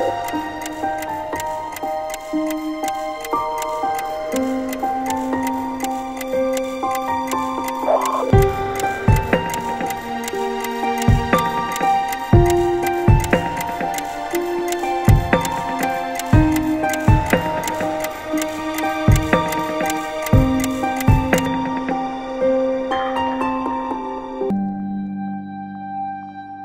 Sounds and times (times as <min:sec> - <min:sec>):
Tick-tock: 0:00.0 - 0:21.8
Music: 0:00.0 - 0:26.6.